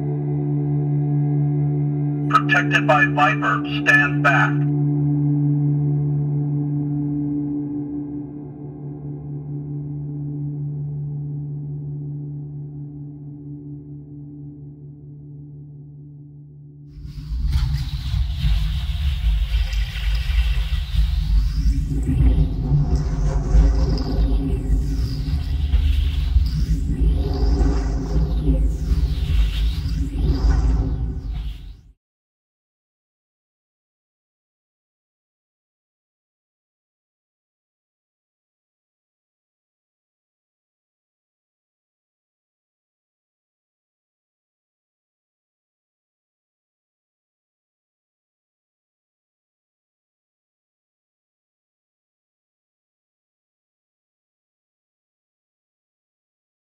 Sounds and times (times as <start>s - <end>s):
Speech: 2.3s - 4.7s.